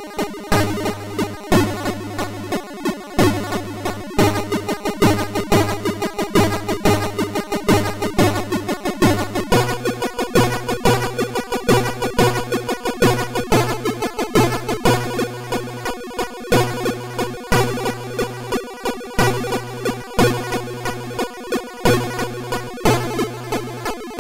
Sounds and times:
Music: 0.0 - 24.2.

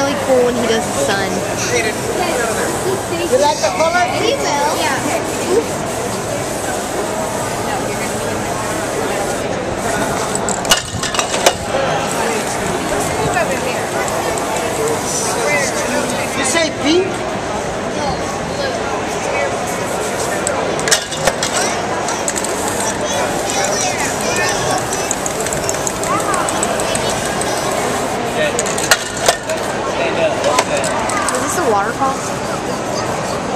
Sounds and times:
Spray: 4.5 - 16.5, 19.8 - 29.7.

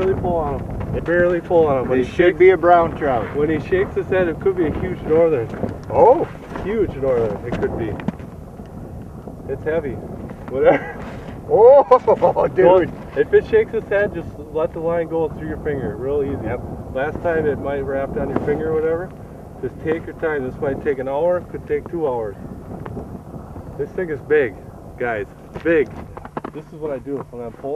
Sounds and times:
Speech: 0.0 - 8.0, 9.5 - 10.8, 11.5 - 22.4, 23.8 - 27.7.

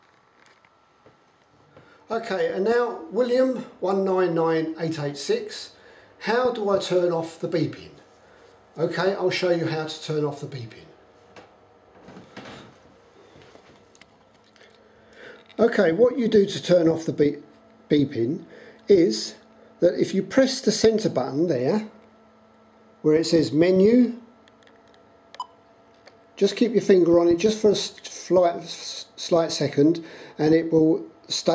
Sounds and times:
Speech: 2.1 - 8.0, 8.8 - 11.0, 15.6 - 22.0, 23.0 - 24.3, 26.4 - 31.5.

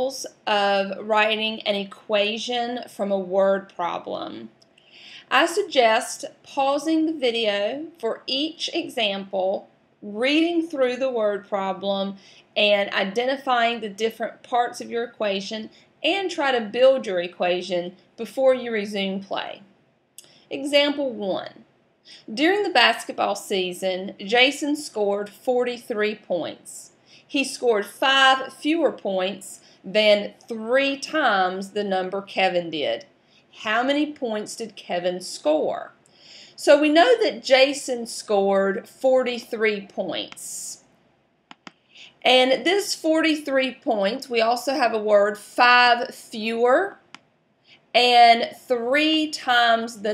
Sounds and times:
Speech: 0.0 - 4.5, 5.3 - 19.7, 20.5 - 21.6, 22.3 - 33.0, 33.6 - 36.0, 36.6 - 40.8, 42.2 - 47.0, 48.0 - 50.1.

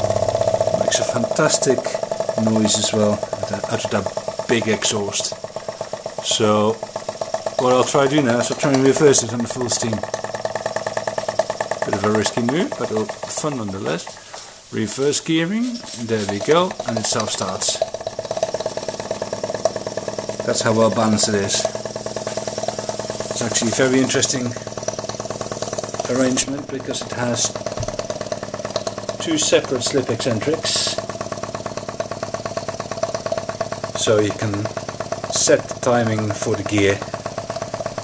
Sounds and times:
Steam: 0.0 - 18.0, 18.6 - 27.9, 28.5 - 38.0
Engine: 0.0 - 38.0
Speech: 0.8 - 5.4, 6.2 - 6.8, 7.6 - 10.0, 11.8 - 14.1, 14.7 - 17.8, 20.5 - 21.8, 23.4 - 24.6, 26.1 - 27.6, 29.2 - 31.0, 34.0 - 34.7, 35.3 - 37.1.

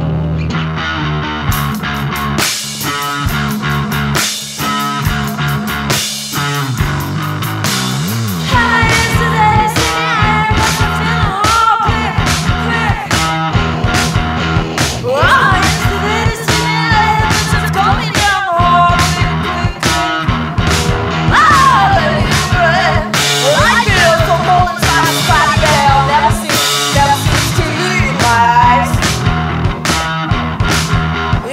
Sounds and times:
Music: 0.0 - 31.5.

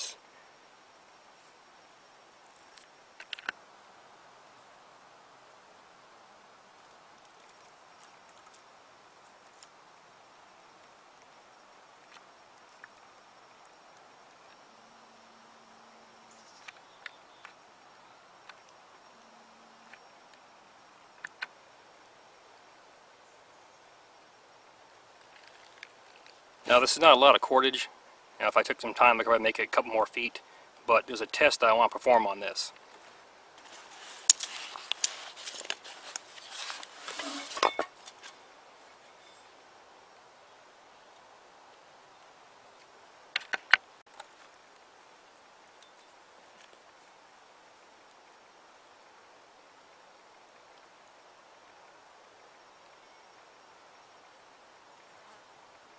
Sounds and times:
Outside, rural or natural: 0.0 - 55.9.

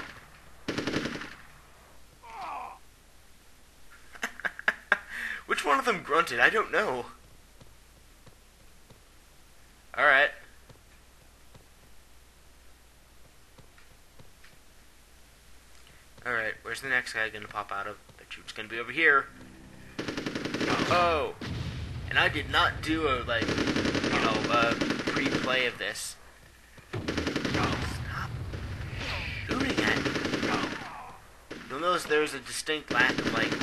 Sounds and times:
Speech: 5.5 - 7.2, 9.9 - 10.4, 16.2 - 19.3, 20.7 - 21.4, 22.1 - 23.5, 24.1 - 26.2, 29.0 - 33.6.

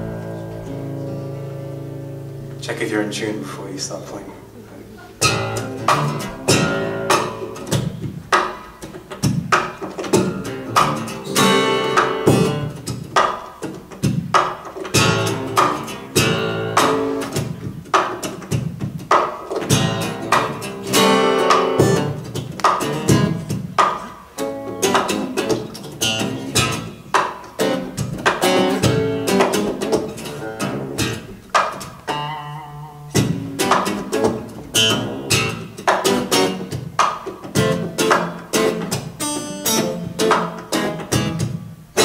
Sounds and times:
Tapping (guitar technique): 4.1 - 42.0.

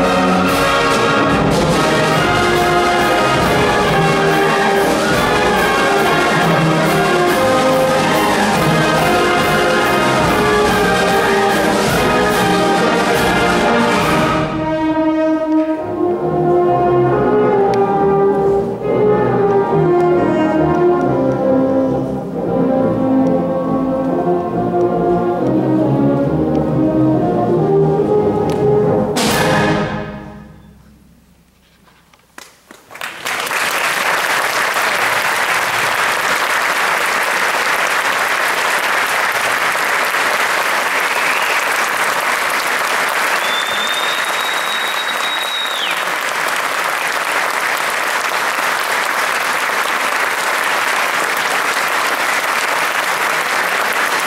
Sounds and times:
Classical music: 0.0 - 31.6
Orchestra: 0.0 - 54.2.

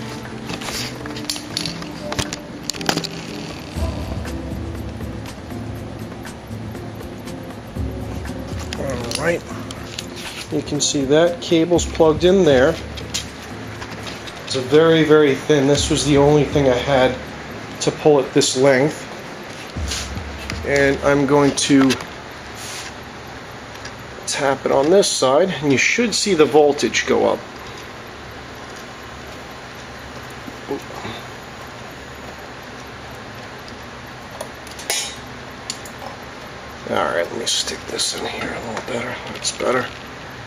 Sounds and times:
Speech: 8.8 - 9.5, 10.5 - 12.8, 14.5 - 17.2, 17.8 - 19.0, 20.6 - 22.0, 24.3 - 27.4, 36.8 - 39.9.

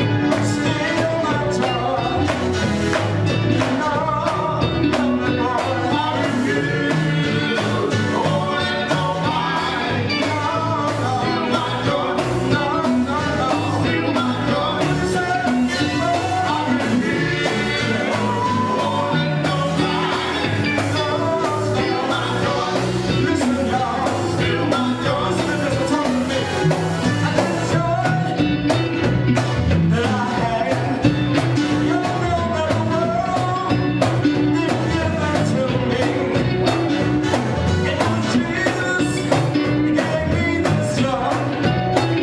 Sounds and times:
Male singing: 0.2 - 2.4, 3.6 - 26.6, 27.2 - 28.4, 29.8 - 37.0, 37.7 - 41.7
Choir: 5.4 - 26.6.

